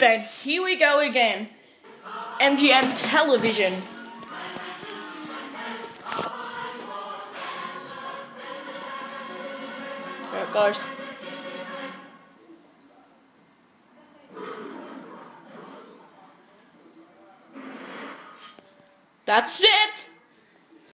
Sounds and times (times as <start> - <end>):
Television: 0.0 - 20.9
Speech: 2.4 - 3.9, 10.3 - 10.9, 19.3 - 20.2.